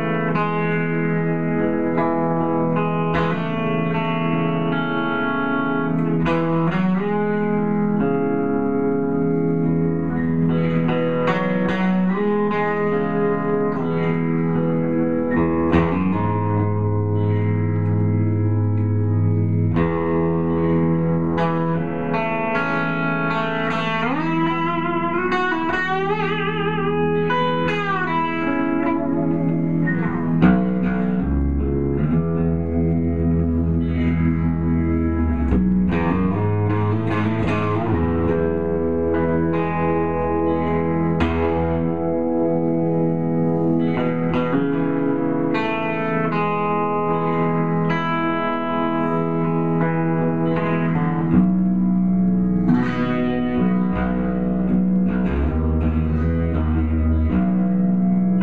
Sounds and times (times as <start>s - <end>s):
Guitar: 0.0s - 58.4s.